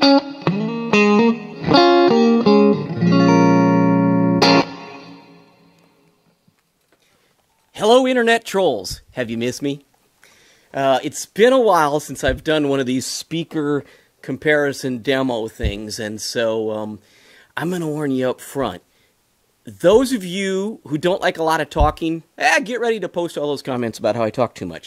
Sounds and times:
Strum: 0:00.0 - 0:05.6
Electric guitar: 0:00.0 - 0:06.0
Speech: 0:07.8 - 0:09.8, 0:10.8 - 0:17.0, 0:17.6 - 0:18.8, 0:19.6 - 0:24.8.

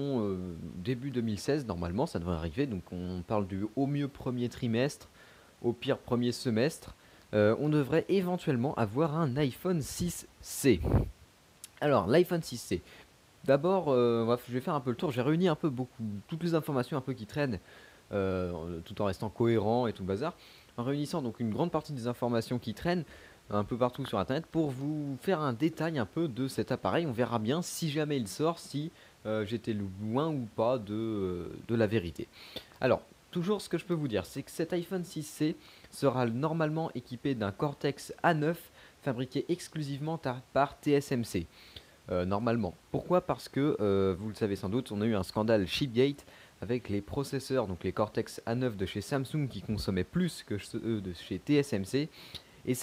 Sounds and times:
Speech: 0:00.0 - 0:41.5, 0:42.1 - 0:52.8.

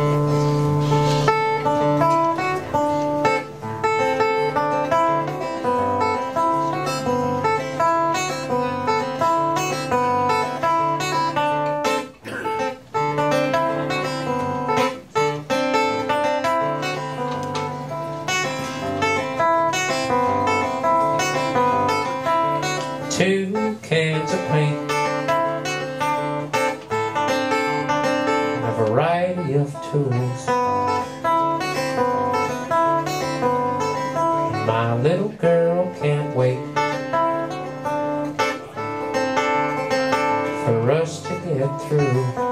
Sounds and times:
Music: 0:00.0 - 0:42.5.

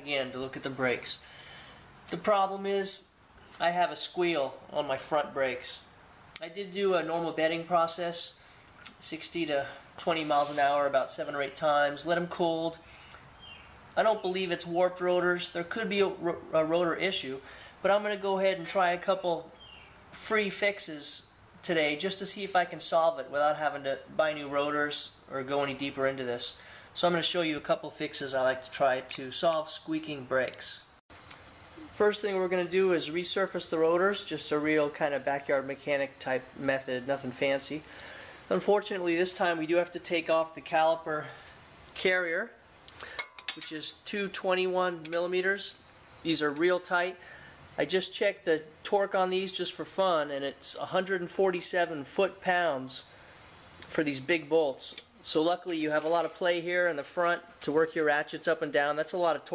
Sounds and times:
Speech: 0:00.0 - 0:01.2, 0:02.1 - 0:12.8, 0:14.0 - 0:19.6, 0:20.2 - 0:30.9, 0:31.8 - 0:37.9, 0:38.5 - 0:41.4, 0:42.0 - 0:42.6, 0:43.6 - 0:47.2, 0:47.8 - 0:53.1, 0:53.9 - 0:59.5.

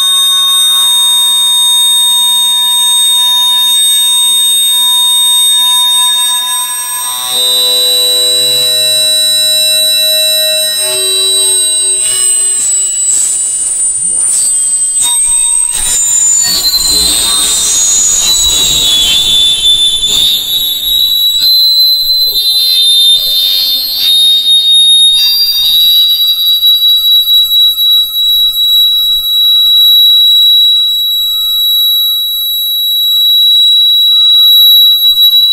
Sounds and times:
Fire alarm: 0:00.0 - 0:35.5.

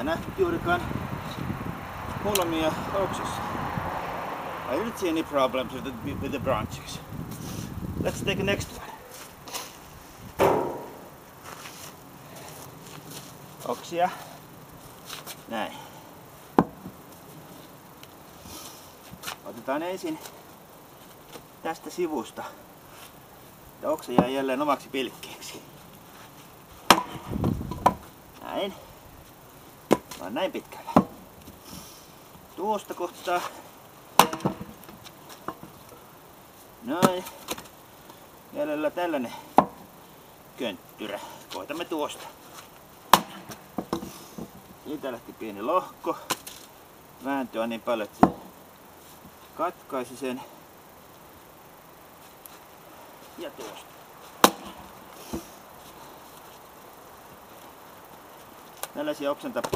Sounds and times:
Speech: 0:00.0 - 0:00.9, 0:02.2 - 0:03.5, 0:04.7 - 0:07.1, 0:08.0 - 0:09.0, 0:13.6 - 0:14.3, 0:15.5 - 0:15.9, 0:19.4 - 0:20.3, 0:21.6 - 0:22.6, 0:23.8 - 0:25.6, 0:28.4 - 0:28.9, 0:30.2 - 0:30.9, 0:32.6 - 0:33.6, 0:36.8 - 0:37.4, 0:38.5 - 0:39.5, 0:40.6 - 0:42.3, 0:44.8 - 0:46.3, 0:47.2 - 0:48.2, 0:49.6 - 0:50.5, 0:53.4 - 0:53.9, 0:58.9 - 0:59.7
Outside, rural or natural: 0:00.0 - 0:59.7.

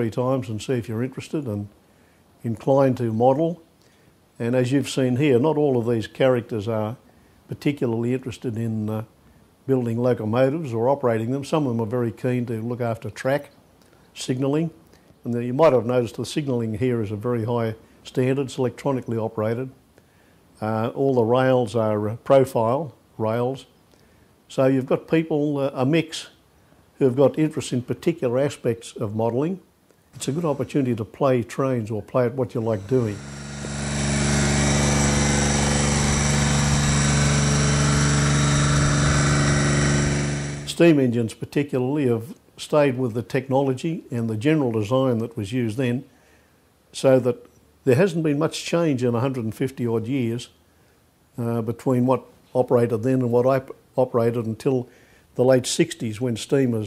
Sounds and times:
Speech: 0:00.0 - 0:01.8, 0:02.4 - 0:03.6, 0:04.4 - 0:09.1, 0:09.7 - 0:13.6, 0:14.2 - 0:19.8, 0:20.6 - 0:23.7, 0:24.5 - 0:26.4, 0:27.0 - 0:33.2, 0:40.7 - 0:46.1, 0:46.9 - 0:50.6, 0:51.4 - 0:56.8.

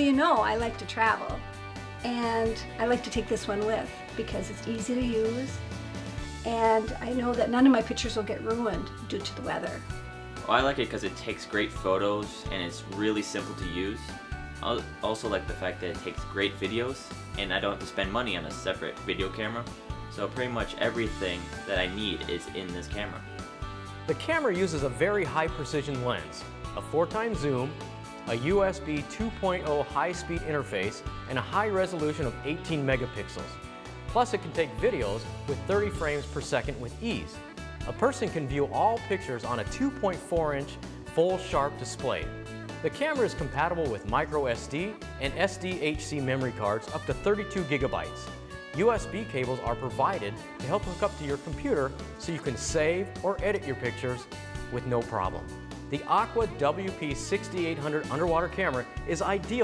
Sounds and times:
Music: 0:00.0 - 0:59.6
Speech: 0:02.1 - 0:05.5, 0:06.5 - 0:09.8, 0:10.5 - 0:23.2, 0:24.1 - 0:33.5, 0:34.2 - 0:59.6.

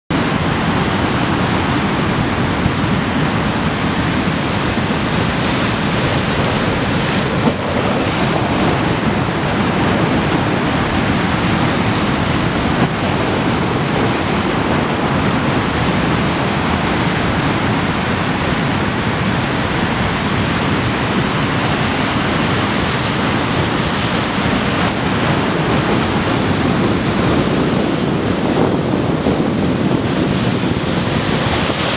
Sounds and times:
Ocean: 0:00.1 - 0:31.9.

